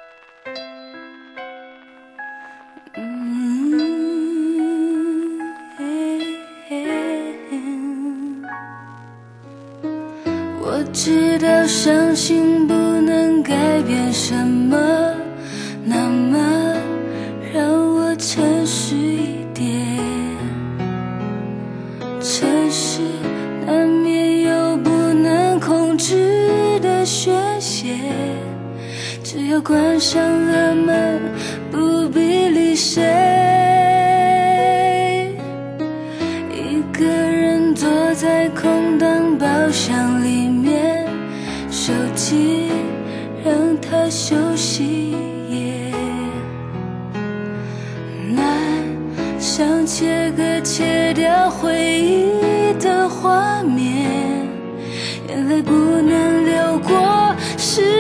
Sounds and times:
Music: 0.0 - 58.0.

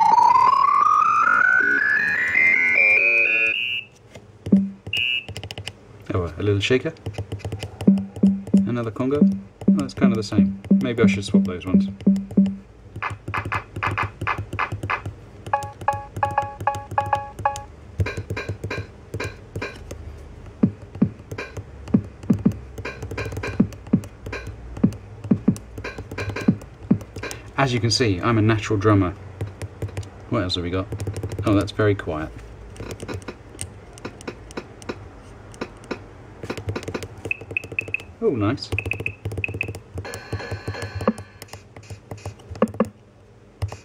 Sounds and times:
Drum machine: 4.4 - 5.6, 7.1 - 19.8, 20.6 - 27.6, 36.5 - 38.1, 38.7 - 43.0
Drum: 4.5 - 4.9, 7.9 - 15.1, 20.6 - 27.3, 38.8 - 41.3
Speech: 6.1 - 7.0, 8.7 - 12.0, 27.6 - 29.2, 30.3 - 32.4, 38.2 - 38.8.

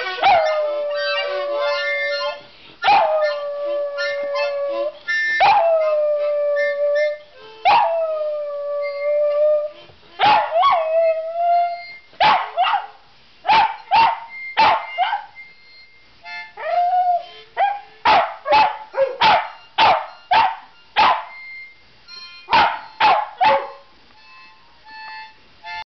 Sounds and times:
Music: 0.0 - 12.2, 13.7 - 18.0, 18.7 - 25.8
Bow-wow: 10.2 - 10.8, 12.2 - 12.9, 13.5 - 15.3, 17.6 - 21.3, 22.5 - 23.8.

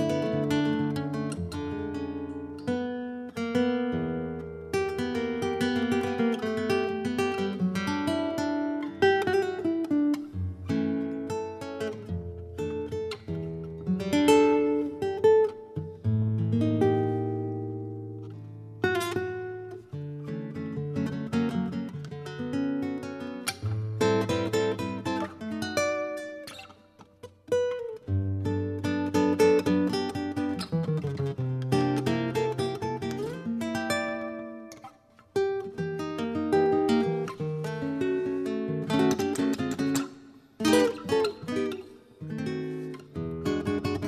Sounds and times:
Acoustic guitar: 0.0 - 44.0.

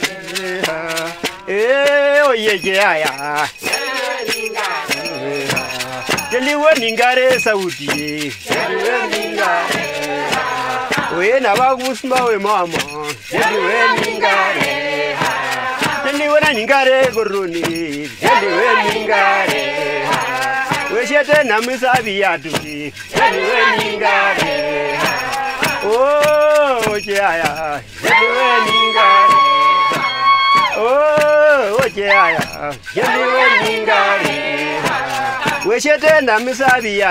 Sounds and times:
Choir: 0.0 - 1.6, 3.6 - 6.6, 8.5 - 11.6, 13.2 - 16.2, 18.2 - 21.1, 23.1 - 27.0, 28.0 - 35.8
Male singing: 0.0 - 37.1
Female singing: 28.1 - 30.8, 33.0 - 33.8.

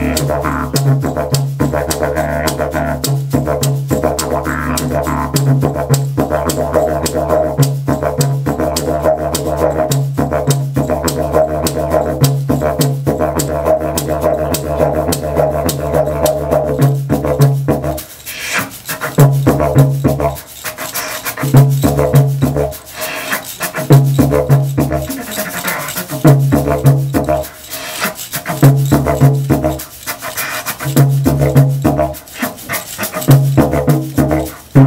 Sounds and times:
Didgeridoo: 0.0 - 34.8
Wind instrument, woodwind instrument: 0.0 - 34.8.

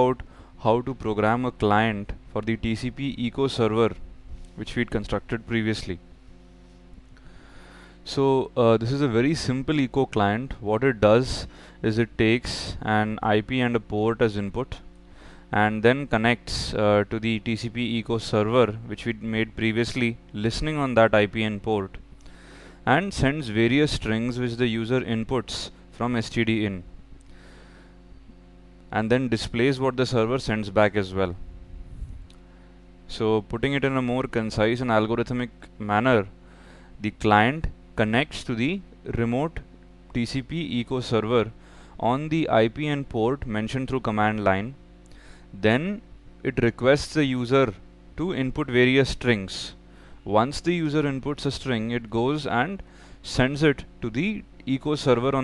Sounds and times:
Speech: 0.0 - 4.0, 4.6 - 6.0, 8.1 - 14.9, 15.5 - 22.0, 22.9 - 26.9, 28.9 - 31.4, 33.1 - 36.4, 37.0 - 44.8, 45.6 - 55.4.

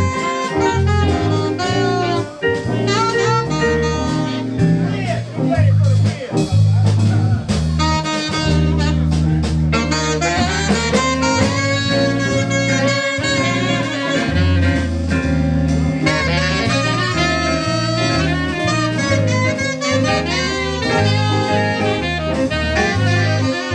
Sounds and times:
Jazz: 0.0 - 23.7
Harmonica: 16.0 - 23.7.

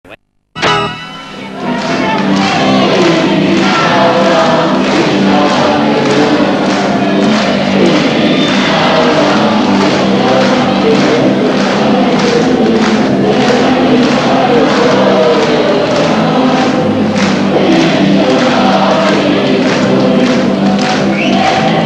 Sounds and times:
Music: 0.6 - 21.8.

